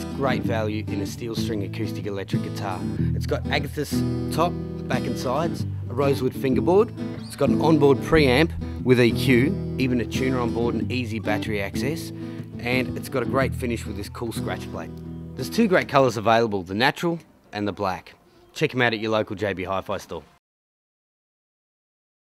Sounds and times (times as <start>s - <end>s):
Strum: 0.0s - 15.9s
Acoustic guitar: 0.0s - 16.4s
Speech: 0.0s - 20.4s.